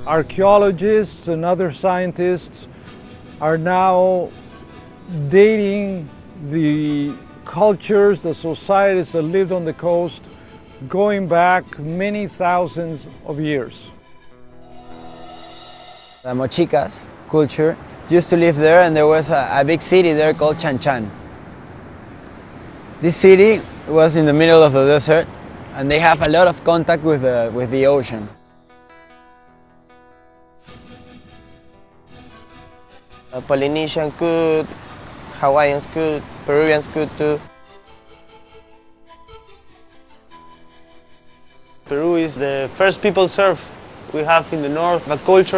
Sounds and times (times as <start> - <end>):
Music: 0.0 - 24.6, 26.0 - 45.5
Speech: 0.1 - 2.7, 3.4 - 4.3, 5.1 - 10.2, 10.8 - 13.9, 16.3 - 21.1, 23.0 - 28.3, 33.4 - 34.7, 35.4 - 37.4, 41.9 - 45.5.